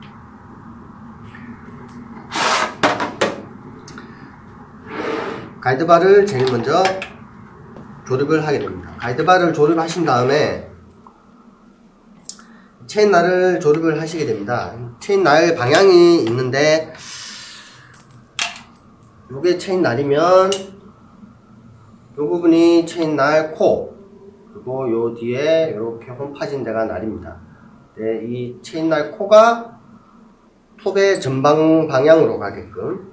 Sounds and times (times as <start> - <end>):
Speech: 5.6 - 7.1, 8.0 - 10.8, 12.8 - 17.0, 19.3 - 20.8, 22.2 - 24.0, 24.6 - 29.8, 30.8 - 33.1.